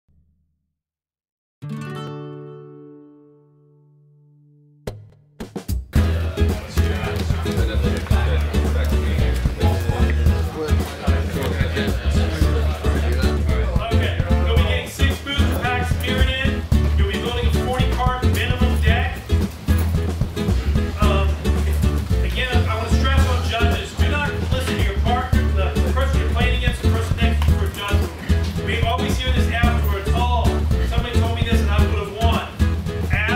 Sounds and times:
Music: 1.6s - 33.3s
Speech: 6.0s - 19.3s, 20.9s - 33.3s
Inside, large room or hall: 6.0s - 33.3s.

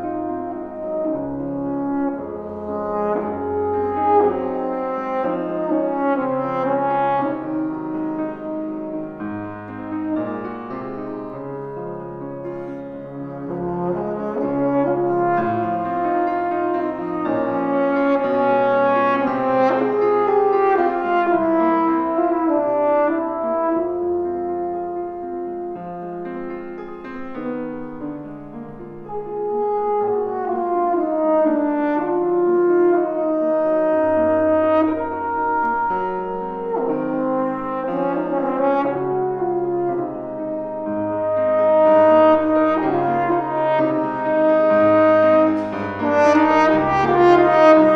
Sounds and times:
Trombone: 0.0s - 11.8s, 12.5s - 25.8s, 29.0s - 47.9s
French horn: 0.0s - 47.9s.

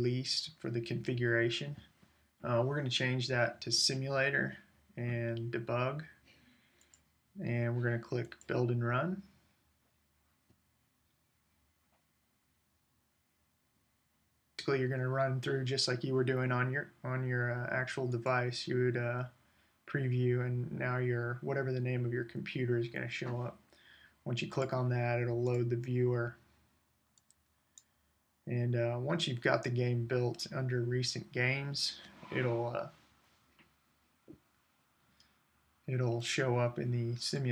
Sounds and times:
Speech: 0.0s - 6.2s, 7.4s - 9.2s, 14.6s - 19.3s, 19.9s - 23.6s, 24.2s - 26.4s, 28.5s - 32.9s, 35.9s - 37.5s.

